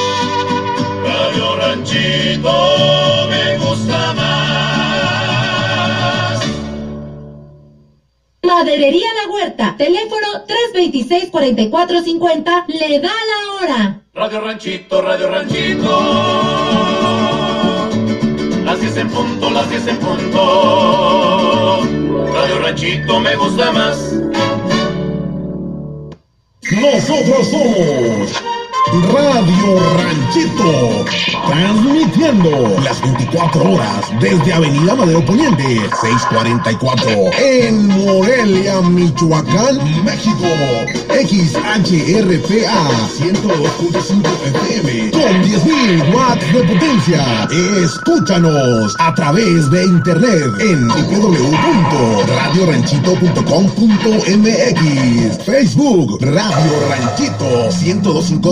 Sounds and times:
Music: 0.0s - 8.2s, 14.6s - 58.5s
Speech: 8.4s - 14.6s, 26.6s - 58.5s.

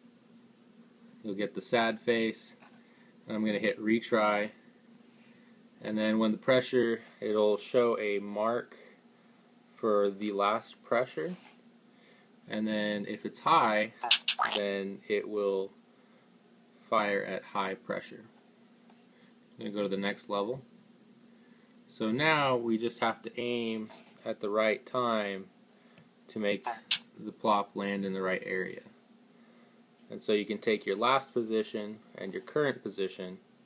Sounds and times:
Speech: 1.2s - 2.6s, 3.3s - 4.6s, 5.8s - 8.9s, 9.8s - 11.4s, 12.5s - 15.8s, 16.8s - 18.4s, 19.6s - 20.7s, 21.9s - 25.5s, 26.3s - 29.0s, 30.1s - 33.4s.

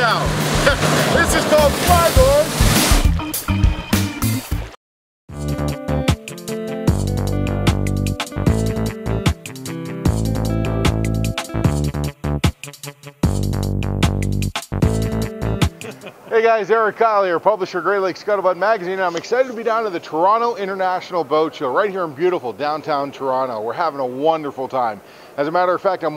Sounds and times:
Speech: 0.0s - 2.5s, 16.3s - 26.1s
Music: 0.0s - 16.1s.

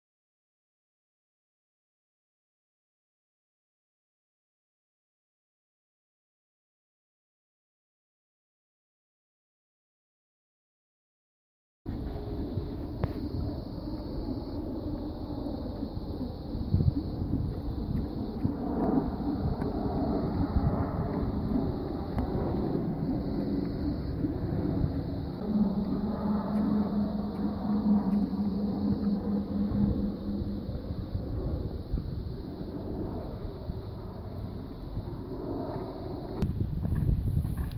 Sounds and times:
Clip-clop: 16.8s - 28.4s, 35.6s - 37.7s.

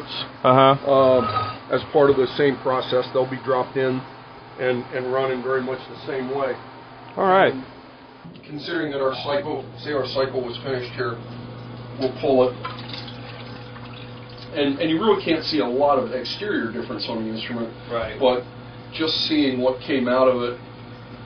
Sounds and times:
Speech: 0.9s - 4.0s, 4.6s - 6.6s, 8.4s - 11.2s, 12.0s - 12.6s, 14.6s - 20.6s.

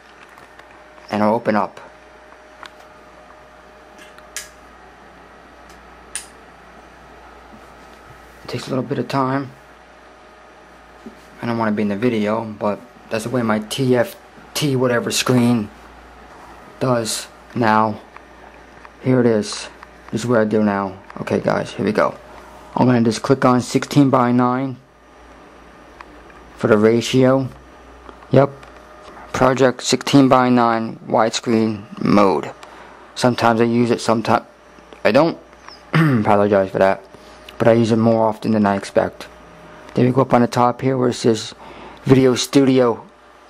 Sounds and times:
Speech: 1.0s - 1.9s, 8.4s - 9.6s, 11.4s - 15.8s, 16.8s - 18.1s, 19.0s - 24.9s, 26.6s - 27.6s, 28.3s - 28.6s, 29.3s - 32.6s, 33.2s - 43.1s.

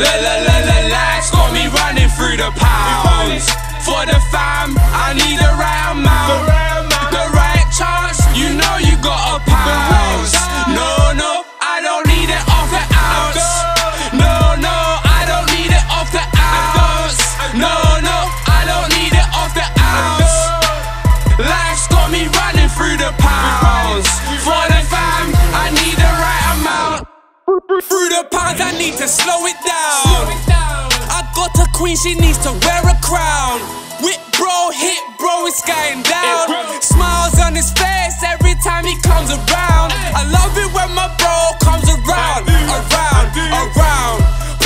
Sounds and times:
Pop music: 0.0s - 44.6s.

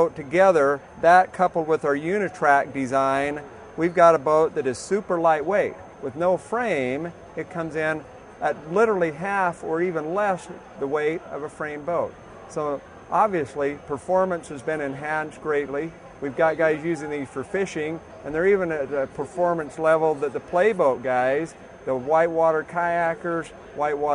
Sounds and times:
Speech: 0.0s - 24.1s.

